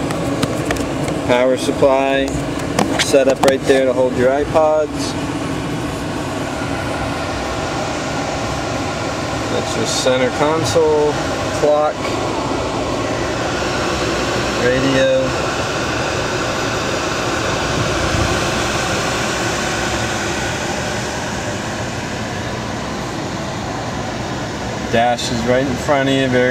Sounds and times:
Car: 0.0s - 26.5s
Speech: 1.3s - 2.4s, 3.0s - 5.2s, 9.5s - 12.1s, 14.6s - 15.4s, 24.9s - 26.5s.

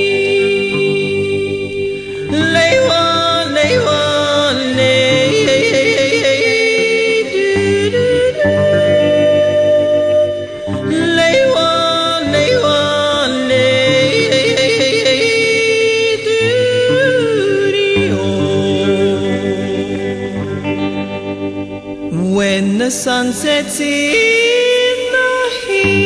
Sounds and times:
Yodeling: 0.0s - 21.2s, 22.2s - 26.0s
Music: 0.0s - 26.0s.

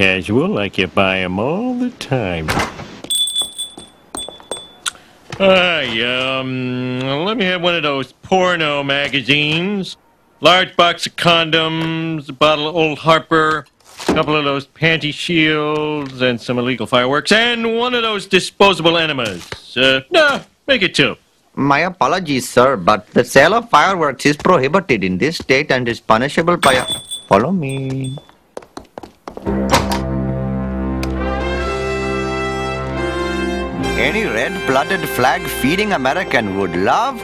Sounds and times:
Trumpet: 29.5s - 37.2s.

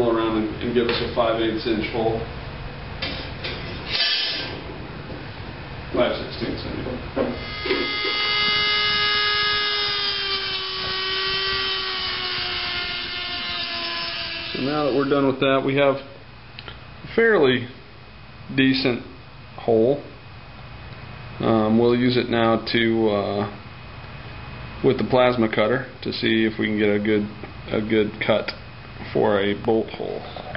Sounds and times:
Speech: 0.0s - 2.3s, 5.9s - 7.4s, 14.6s - 16.2s, 17.1s - 17.8s, 18.5s - 20.2s, 21.4s - 23.6s, 24.8s - 30.5s
Drill: 3.9s - 4.6s, 7.4s - 15.1s.

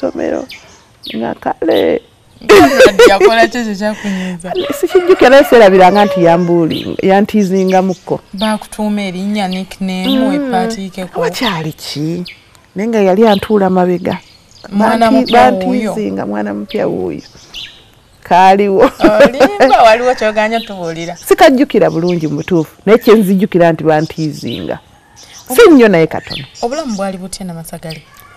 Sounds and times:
Outside, rural or natural: 0.0s - 28.3s
Speech: 10.0s - 12.0s, 12.8s - 17.2s.

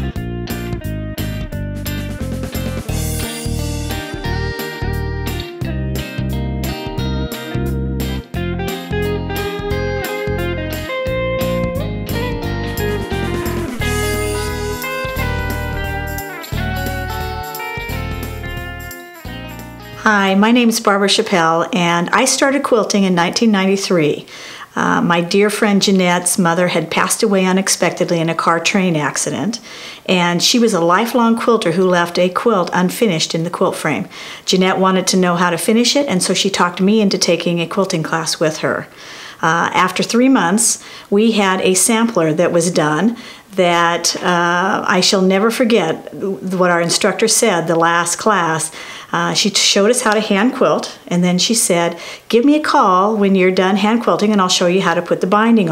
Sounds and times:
Music: 0.0s - 20.4s.

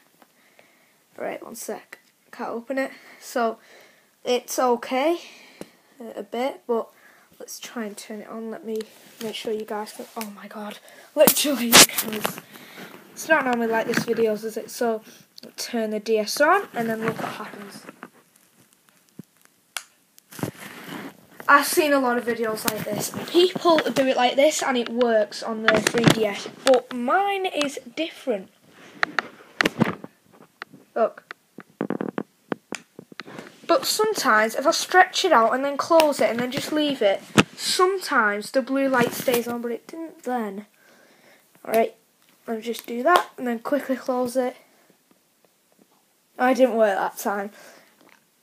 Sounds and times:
Speech: 1.2s - 3.6s, 4.2s - 5.4s, 6.0s - 12.4s, 13.2s - 17.9s, 21.5s - 28.5s, 31.0s - 31.2s, 33.7s - 40.7s, 41.6s - 44.6s, 46.4s - 47.6s.

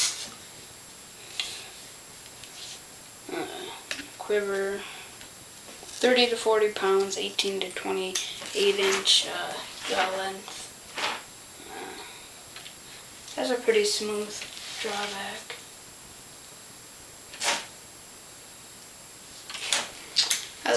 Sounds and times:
Inside, small room: 0.0s - 20.7s
Speech: 3.3s - 4.9s, 6.0s - 10.6s, 13.3s - 15.6s.

